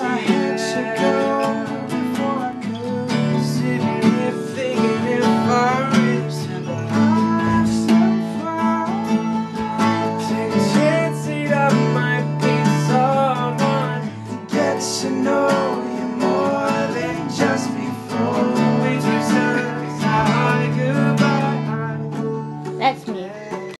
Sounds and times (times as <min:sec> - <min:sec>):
Music: 0:00.0 - 0:23.7
Speech: 0:22.8 - 0:23.4.